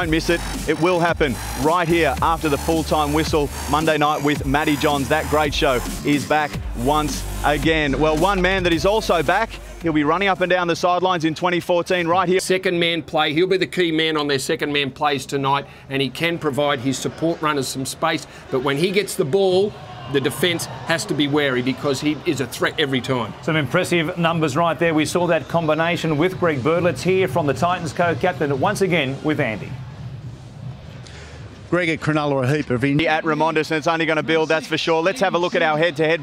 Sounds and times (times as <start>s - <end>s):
Speech: 0.0s - 29.8s, 31.7s - 36.2s.